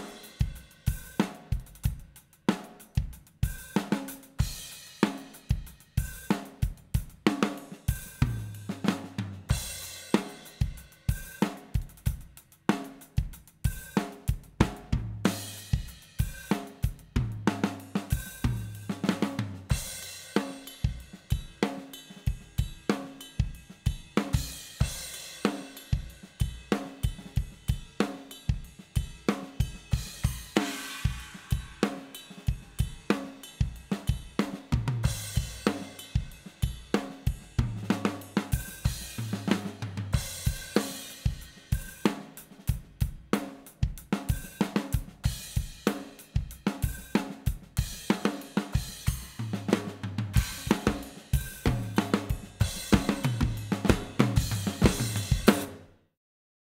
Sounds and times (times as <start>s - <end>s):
Drum kit: 0.0s - 56.0s
Bass drum: 8.0s - 10.0s, 13.2s - 20.1s, 32.5s - 55.8s.